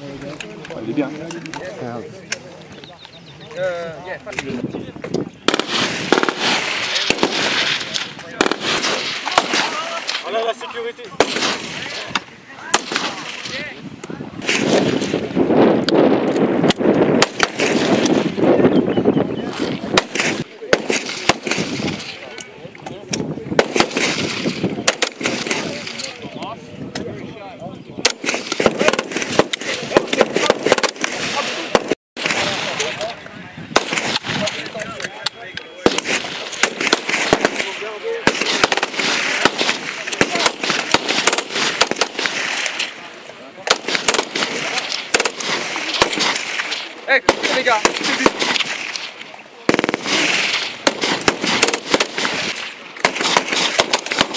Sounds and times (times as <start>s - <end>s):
Outside, rural or natural: 0.0s - 54.3s.